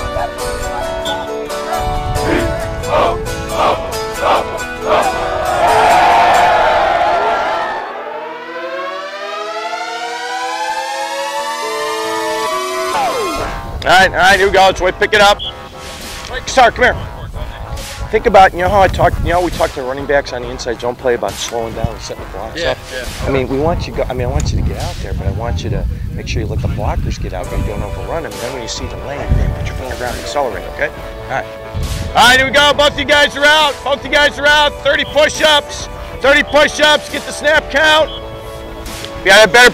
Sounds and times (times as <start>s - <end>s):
Music: 0.0s - 39.7s
Speech: 18.1s - 31.5s.